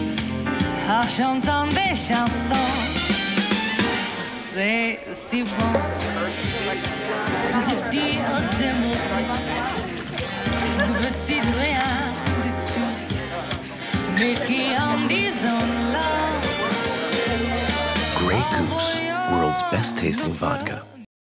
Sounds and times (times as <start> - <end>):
Music: 0.0 - 21.1
Speech: 18.2 - 21.0.